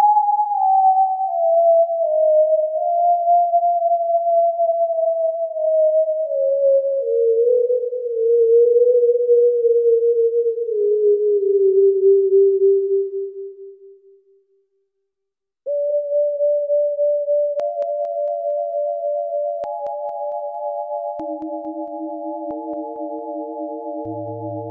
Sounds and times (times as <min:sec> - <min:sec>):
Synthesizer: 0:17.5 - 0:24.7.